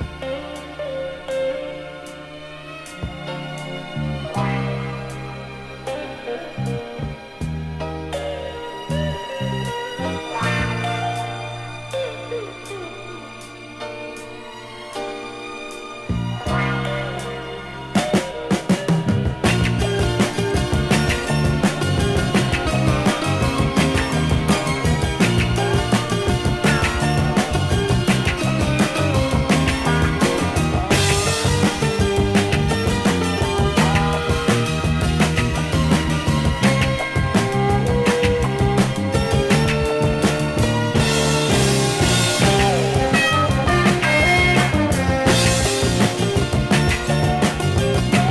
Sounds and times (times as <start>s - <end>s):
Orchestra: 0.0s - 48.3s.